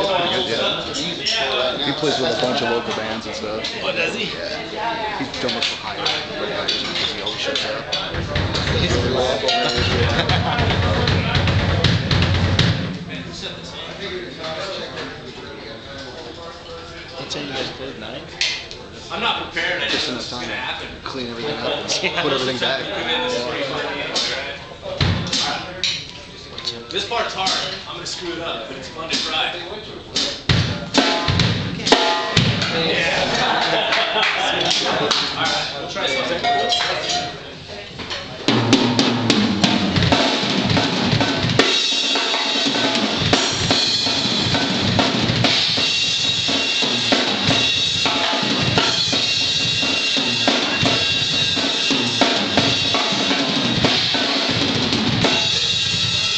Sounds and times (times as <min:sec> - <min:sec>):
Speech: 0:00.0 - 0:12.1, 0:13.1 - 0:31.0, 0:31.8 - 0:38.5
Drum kit: 0:05.3 - 0:14.7, 0:25.0 - 0:26.1, 0:30.2 - 0:35.8, 0:38.0 - 0:56.3.